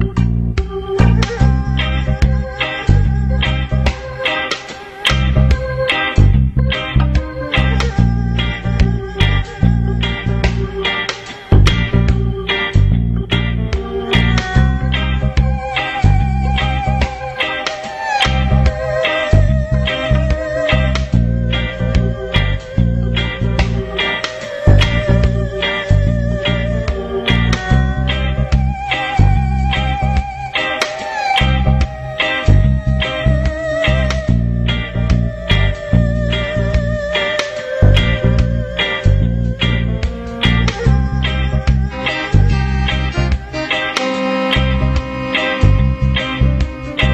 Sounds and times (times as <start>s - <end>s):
Music: 0.0s - 47.1s.